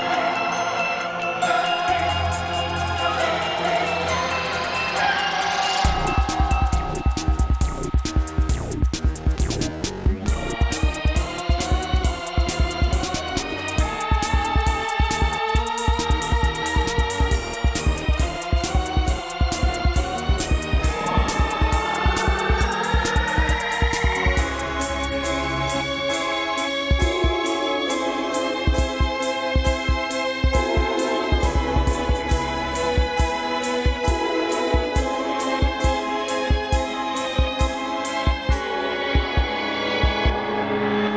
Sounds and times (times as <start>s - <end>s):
Music: 0.0s - 41.1s.